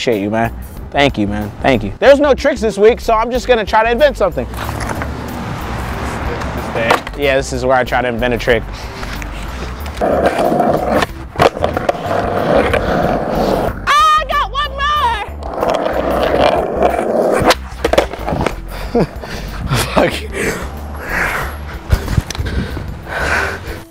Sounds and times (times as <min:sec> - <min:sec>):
Skateboard: 0:04.6 - 0:05.2, 0:09.4 - 0:13.8, 0:15.4 - 0:18.7.